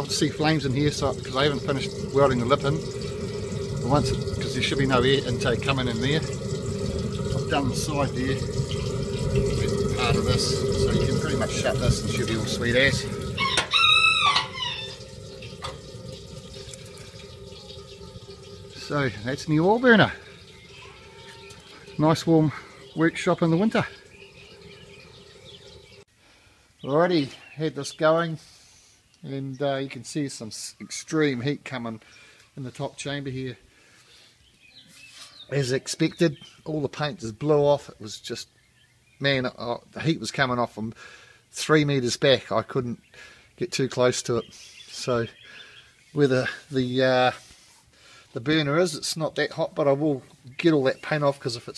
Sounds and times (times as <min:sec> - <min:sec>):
Speech: 0:00.0 - 0:02.8, 0:03.8 - 0:06.3, 0:07.5 - 0:08.5, 0:09.9 - 0:13.2, 0:18.8 - 0:20.2, 0:22.0 - 0:24.0, 0:26.8 - 0:28.4, 0:29.2 - 0:32.0, 0:32.6 - 0:33.6, 0:35.5 - 0:38.5, 0:39.2 - 0:41.0, 0:41.6 - 0:43.0, 0:43.6 - 0:45.4, 0:46.2 - 0:47.4, 0:48.4 - 0:51.7.